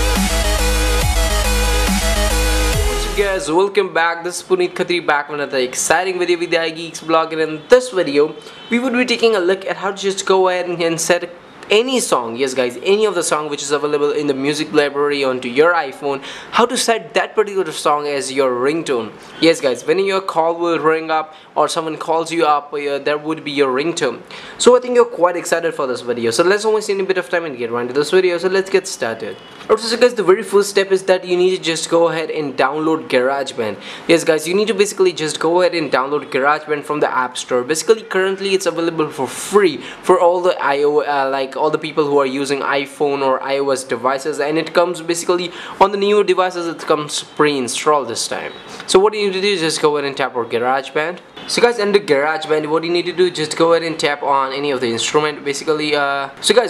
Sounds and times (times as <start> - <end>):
Speech: 2.8 - 56.6.